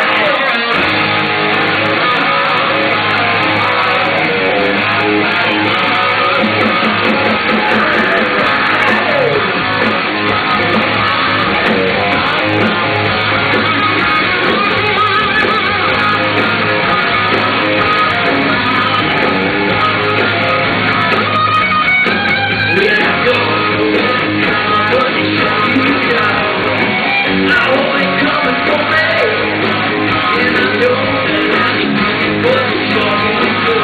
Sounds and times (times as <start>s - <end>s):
Music: 0.0s - 33.8s.